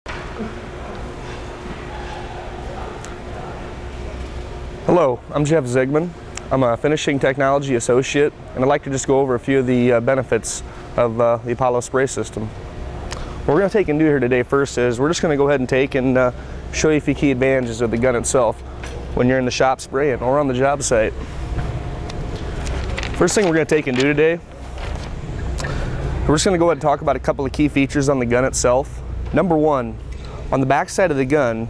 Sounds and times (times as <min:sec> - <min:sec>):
Speech: 0:04.9 - 0:12.5, 0:13.5 - 0:18.6, 0:19.2 - 0:21.2, 0:23.2 - 0:24.4, 0:26.3 - 0:31.6.